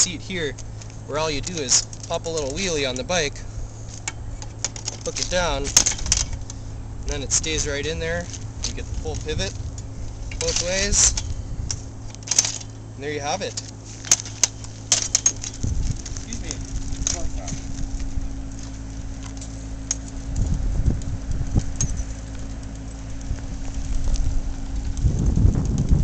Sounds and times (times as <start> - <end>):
Speech: 0.0 - 3.4, 5.0 - 5.8, 7.1 - 9.6, 10.4 - 11.2, 13.0 - 13.6, 16.2 - 17.6
Bicycle: 0.0 - 26.0.